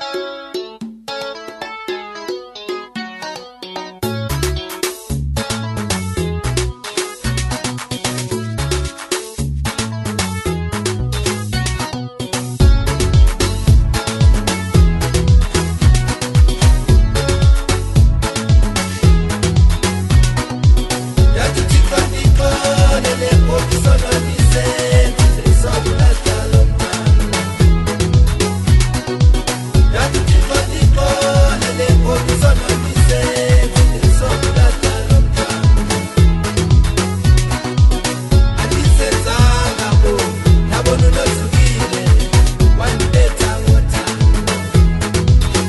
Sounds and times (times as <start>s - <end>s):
Pop music: 0.0s - 45.6s.